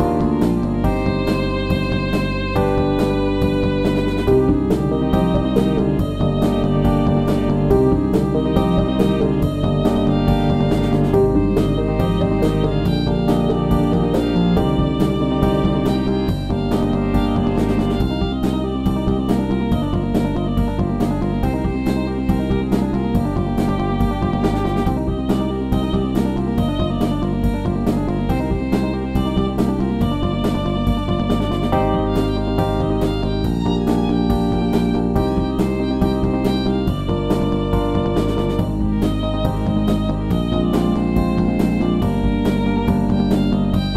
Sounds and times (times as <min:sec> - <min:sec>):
Background music: 0:00.0 - 0:43.9.